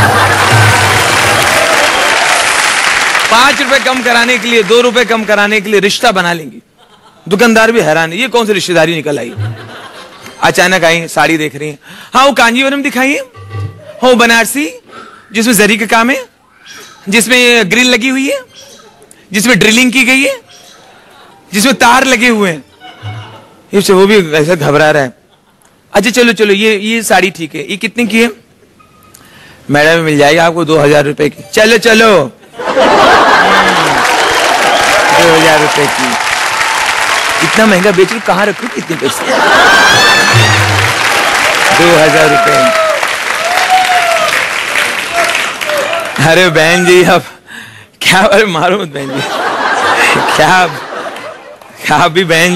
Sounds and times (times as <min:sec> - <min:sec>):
Laughter: 0:00.0 - 0:01.0, 0:06.8 - 0:07.4, 0:09.2 - 0:10.4, 0:32.4 - 0:34.8, 0:39.0 - 0:40.6, 0:49.0 - 0:51.9.